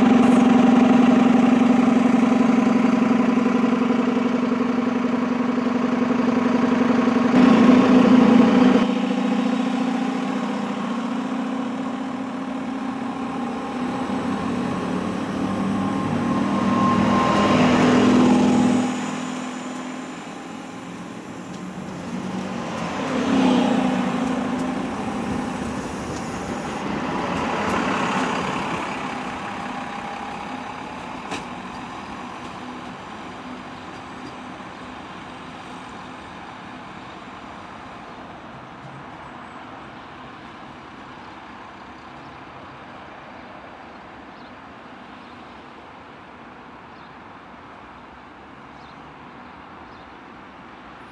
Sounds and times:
Railroad car, train wagon: 0.0s - 51.1s
Train: 0.0s - 51.1s.

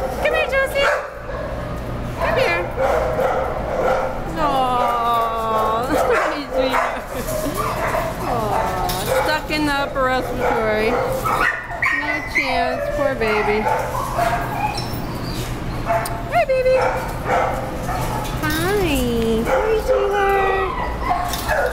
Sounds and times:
Bow-wow: 10.4s - 12.2s.

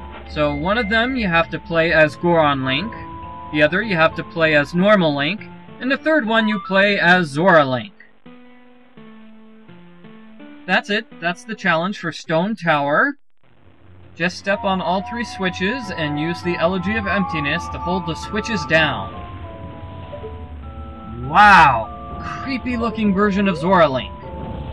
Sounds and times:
Narration, monologue: 0.0s - 8.2s, 10.1s - 13.2s, 14.2s - 19.2s, 21.1s - 24.3s.

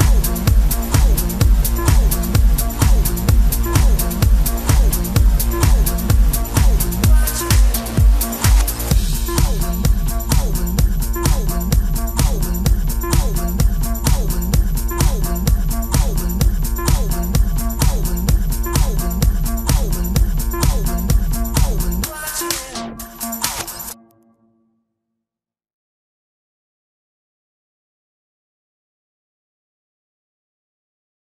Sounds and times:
Electronic music: 0.0s - 24.5s.

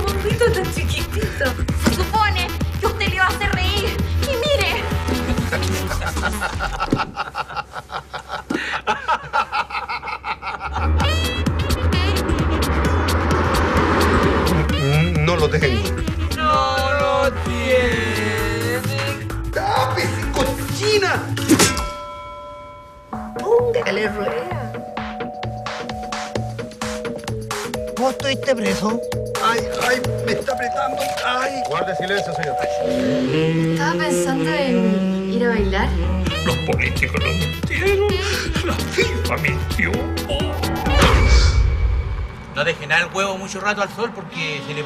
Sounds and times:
Music: 0.0s - 7.0s, 10.7s - 42.7s.

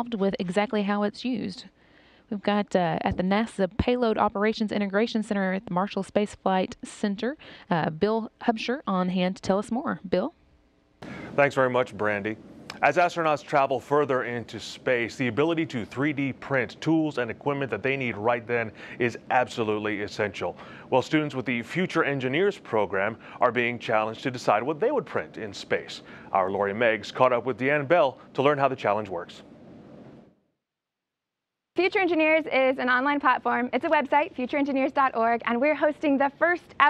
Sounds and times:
Speech: 0.0s - 1.7s, 2.3s - 10.3s, 11.2s - 29.4s, 31.8s - 36.9s.

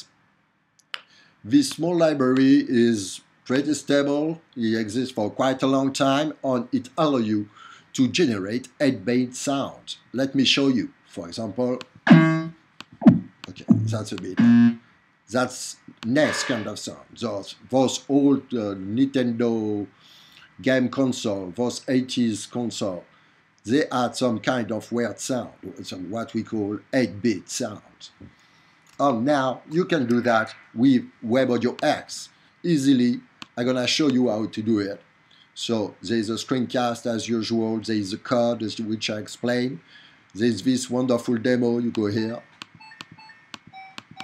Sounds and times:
Speech: 1.5s - 11.9s, 13.5s - 14.5s, 15.3s - 19.9s, 20.6s - 23.1s, 23.7s - 28.3s, 29.0s - 35.0s, 35.6s - 39.8s, 40.4s - 42.5s.

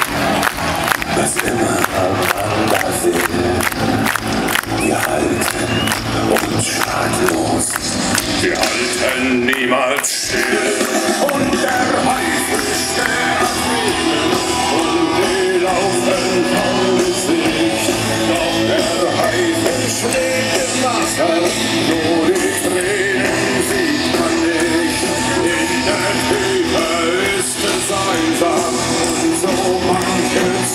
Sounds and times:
Cheering: 0.0s - 30.7s
Music: 0.0s - 30.7s
Singing: 0.0s - 30.7s.

